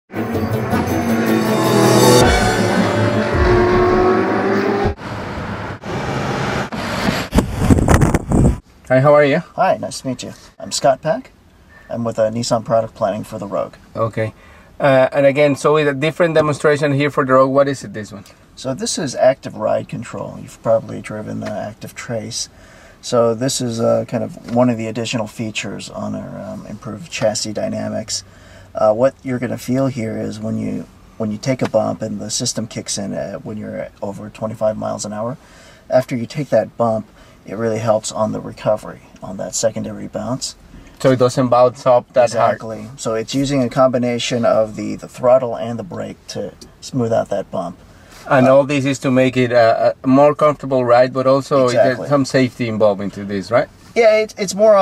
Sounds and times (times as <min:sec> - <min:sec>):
Music: 0:00.1 - 0:03.2
Car: 0:00.1 - 0:08.7
Speech: 0:08.9 - 0:28.2, 0:28.8 - 0:54.8.